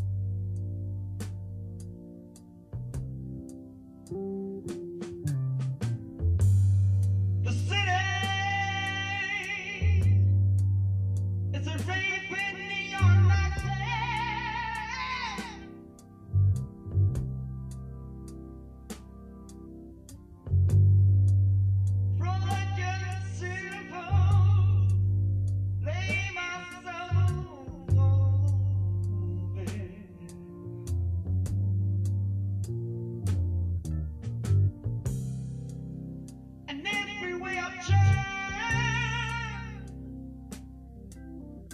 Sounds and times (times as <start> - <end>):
Music: 0.0 - 41.7.